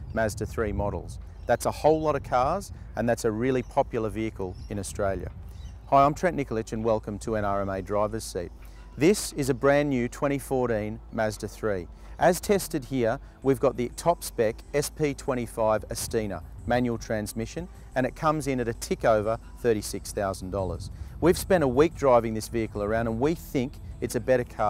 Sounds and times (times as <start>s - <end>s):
Speech: 0.1s - 5.3s, 5.9s - 24.7s.